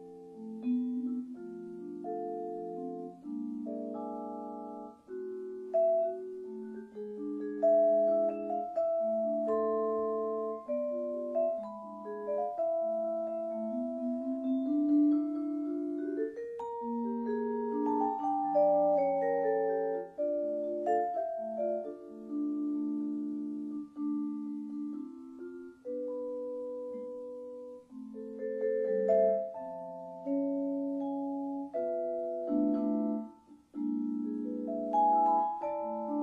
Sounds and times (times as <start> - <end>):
Glockenspiel: 0.0 - 36.2
Marimba, xylophone: 0.0 - 36.2.